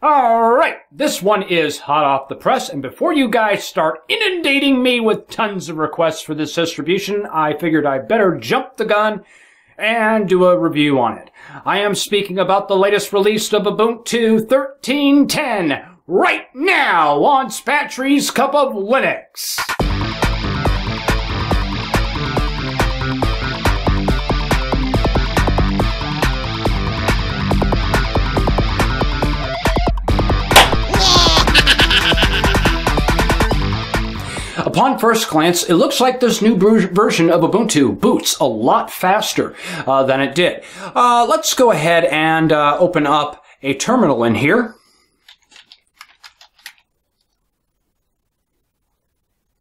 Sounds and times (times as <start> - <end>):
Speech: 0.0 - 9.2, 9.8 - 19.8, 34.6 - 44.8
Music: 19.6 - 34.6.